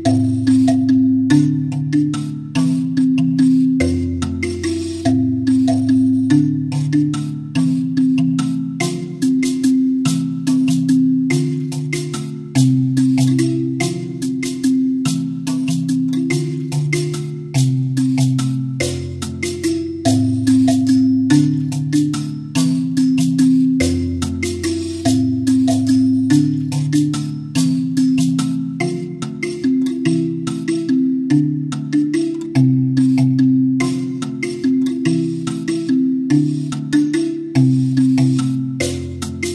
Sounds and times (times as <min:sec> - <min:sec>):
Music: 0:00.0 - 0:39.5.